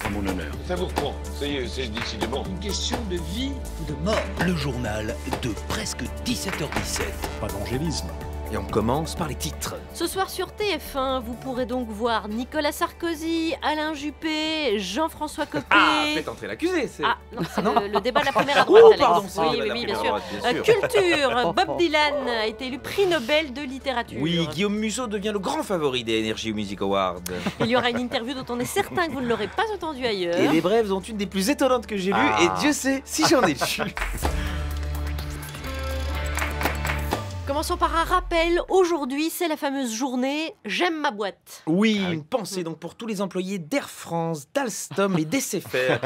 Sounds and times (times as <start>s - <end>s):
Music: 0.0s - 46.0s
Speech: 24.2s - 33.9s.